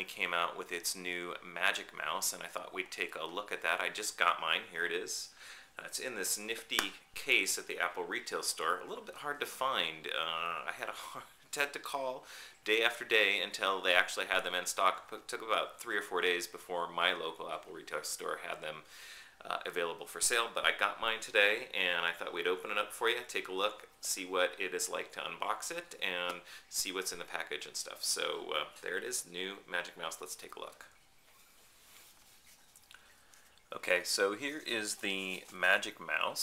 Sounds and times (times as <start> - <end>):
Speech: 0.0 - 31.0, 33.7 - 36.4.